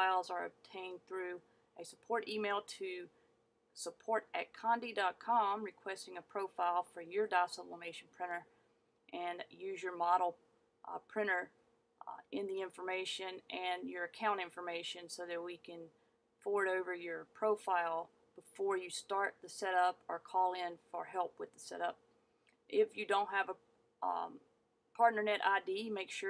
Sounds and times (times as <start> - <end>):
Speech: 0.0 - 3.1, 3.8 - 8.5, 9.1 - 22.0, 22.7 - 24.4, 25.0 - 26.3.